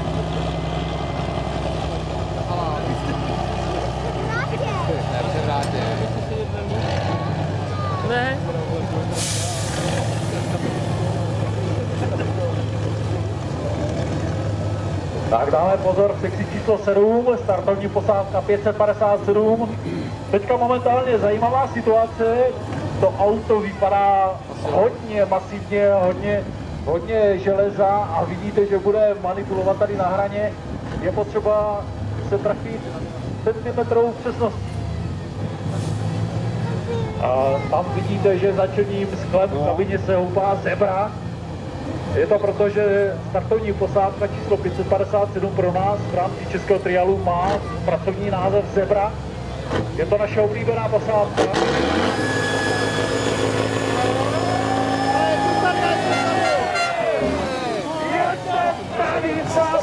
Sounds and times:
Truck: 0.0 - 59.8.

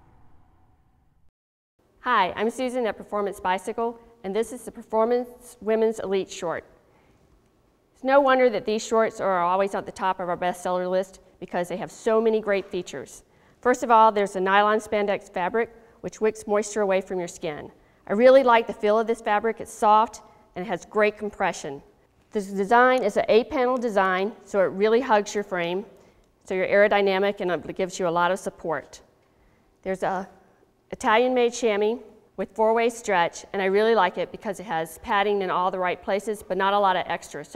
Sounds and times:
Speech: 2.0 - 6.6, 8.0 - 25.9, 26.5 - 29.0, 29.8 - 30.3, 30.9 - 37.5.

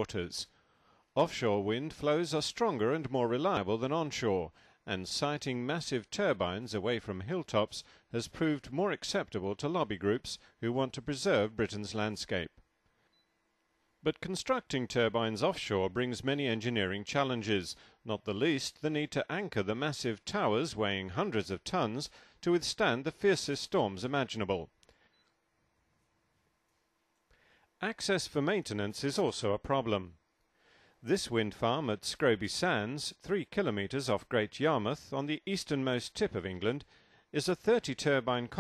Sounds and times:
Speech: 0.0 - 0.5, 1.2 - 12.6, 14.0 - 24.8, 27.8 - 30.2, 31.0 - 38.6.

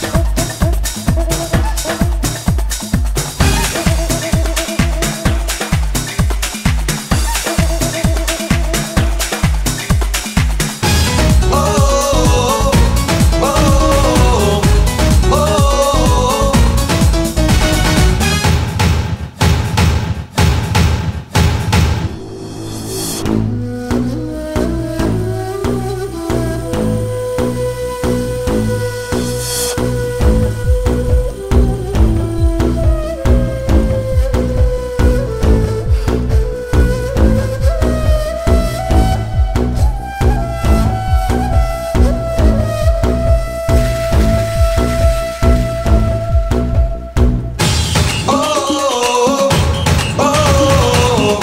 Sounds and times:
Music: 0.0 - 51.4.

